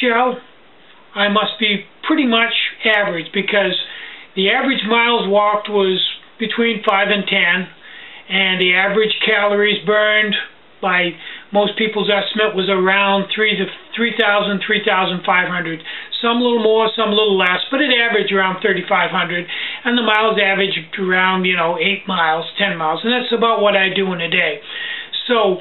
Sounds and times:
Speech: 0.0 - 0.5, 1.1 - 25.6.

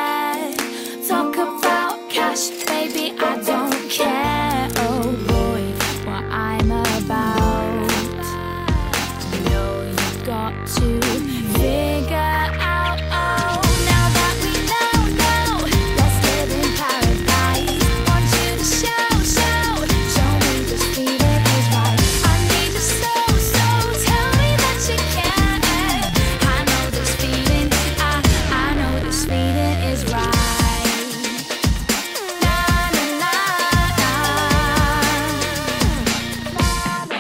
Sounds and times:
Music: 0.0 - 37.2.

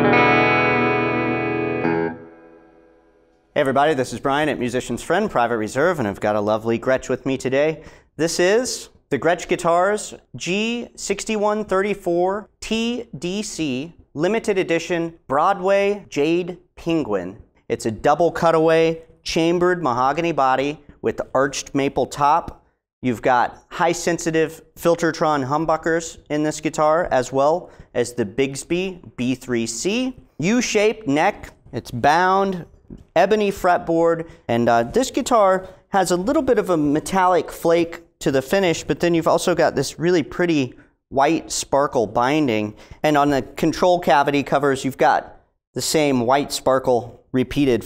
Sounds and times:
Speech: 3.6 - 47.8.

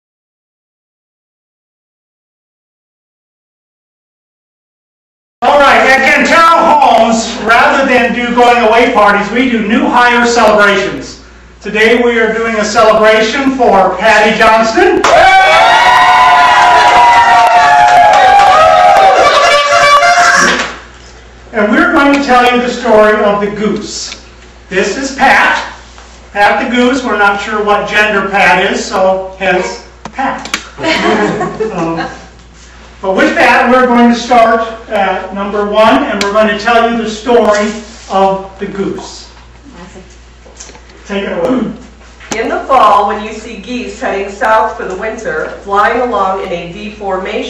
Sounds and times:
Speech: 5.4 - 15.0, 21.5 - 25.8, 26.4 - 30.5, 33.0 - 40.0, 41.1 - 47.5.

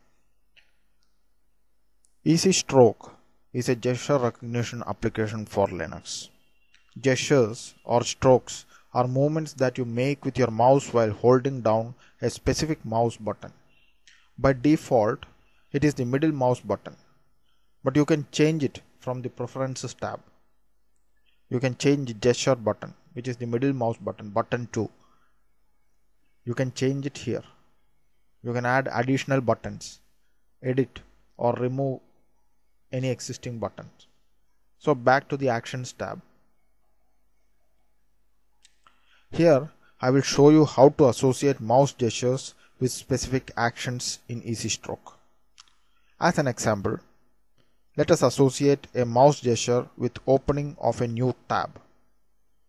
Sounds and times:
Speech: 2.3 - 6.3, 7.0 - 13.6, 14.4 - 17.0, 17.9 - 20.2, 21.5 - 25.0, 26.5 - 27.5, 28.4 - 30.0, 30.6 - 32.0, 32.9 - 34.0, 34.8 - 36.2, 39.3 - 45.2, 46.2 - 47.0, 48.0 - 51.8.

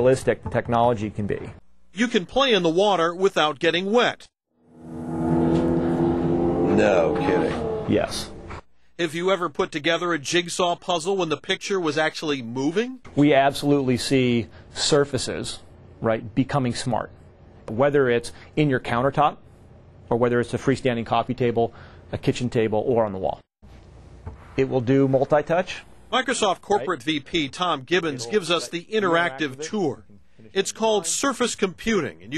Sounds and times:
Speech: 0.0 - 4.3, 6.7 - 8.3, 9.0 - 17.1, 17.7 - 19.4, 20.1 - 23.4, 24.6 - 32.3.

